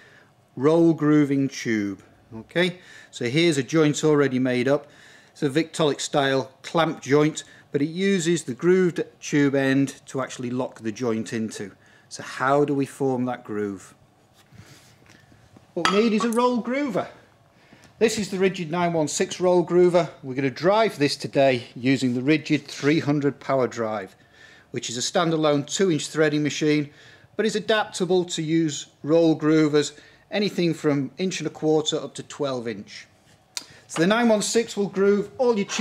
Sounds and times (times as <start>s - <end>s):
Speech: 0.6s - 14.0s, 15.8s - 17.2s, 18.0s - 33.1s, 33.9s - 35.8s.